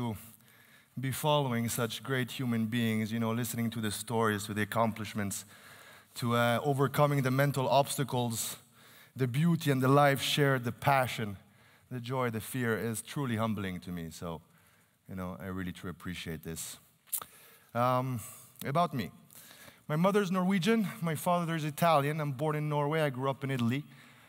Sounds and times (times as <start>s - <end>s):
Male speech, man speaking: 0.0s - 0.3s, 1.0s - 5.5s, 6.2s - 8.6s, 9.2s - 14.4s, 15.1s - 16.8s, 17.8s - 19.2s, 19.9s - 23.9s
Narration, monologue: 0.0s - 24.2s.